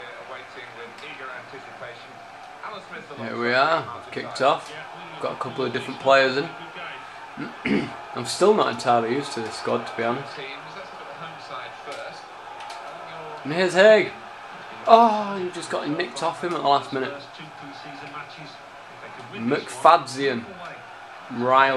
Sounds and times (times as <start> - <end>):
Speech: 0.0 - 12.2, 12.9 - 21.7.